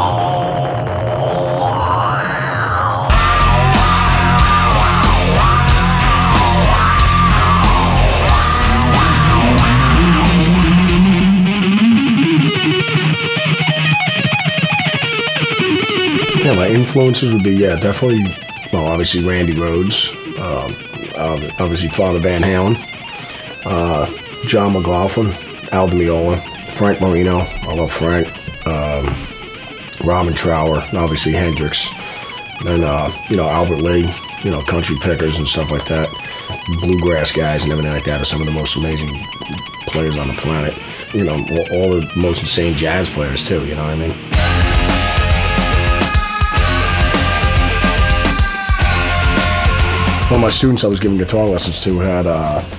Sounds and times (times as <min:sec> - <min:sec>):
Guitar: 0:00.0 - 0:52.7
Heavy metal: 0:00.0 - 0:52.7.